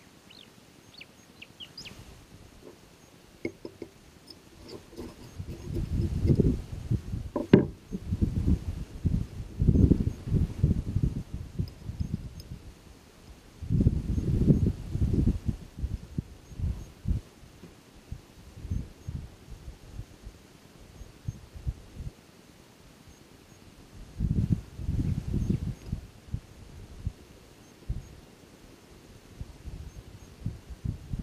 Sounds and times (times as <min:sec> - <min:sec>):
Rustle: 0:00.0 - 0:31.2.